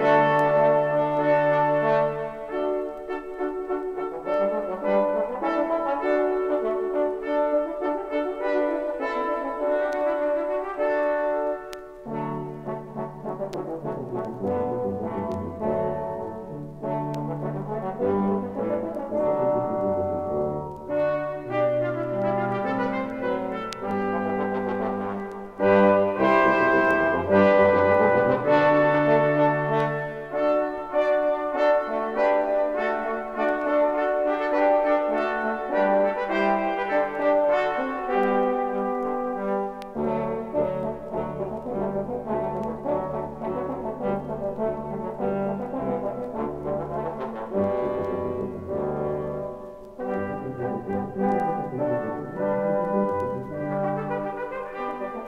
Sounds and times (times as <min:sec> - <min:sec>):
French horn: 0:00.0 - 0:55.2.